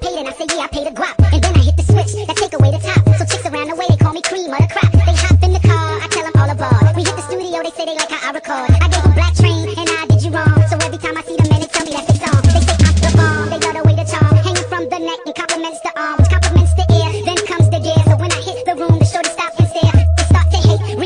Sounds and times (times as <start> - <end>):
Music: 0.0 - 21.0.